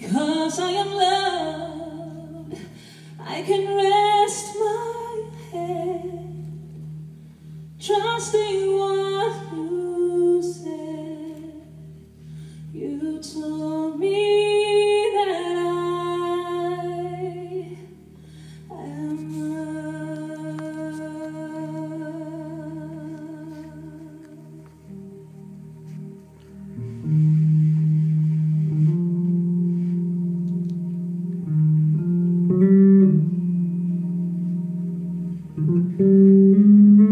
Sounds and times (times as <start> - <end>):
Vocal music: 0.0 - 37.1.